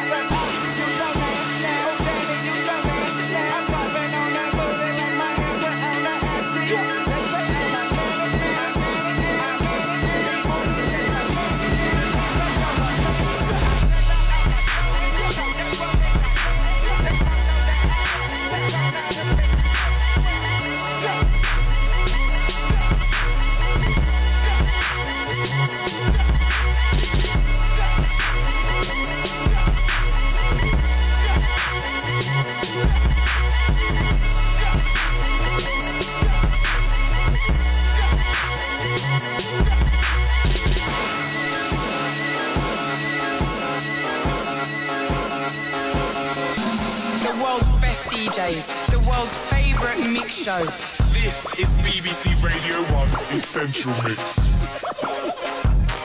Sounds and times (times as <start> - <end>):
Music: 0.0 - 56.0.